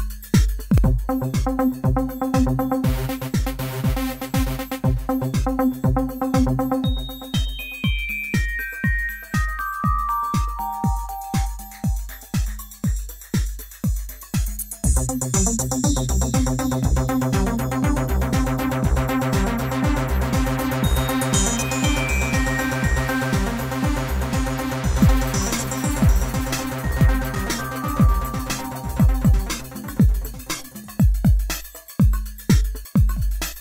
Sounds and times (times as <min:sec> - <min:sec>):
Music: 0:00.0 - 0:33.6.